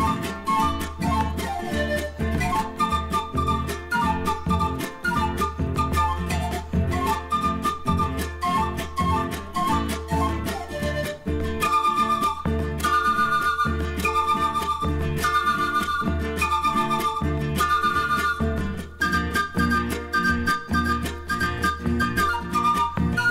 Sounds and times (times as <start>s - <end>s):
Music: 0.0s - 23.3s.